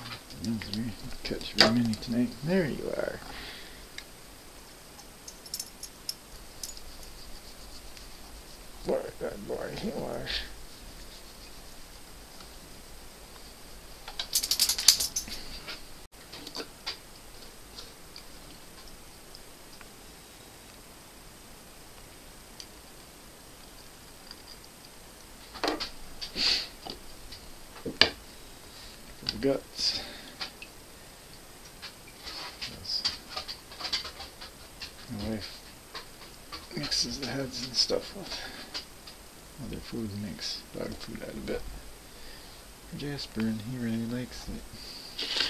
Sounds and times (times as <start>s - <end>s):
Speech: 0.0s - 3.3s, 8.8s - 10.6s, 29.2s - 30.2s, 32.7s - 33.2s, 35.1s - 35.6s, 36.7s - 38.6s, 39.6s - 41.7s, 42.9s - 44.7s.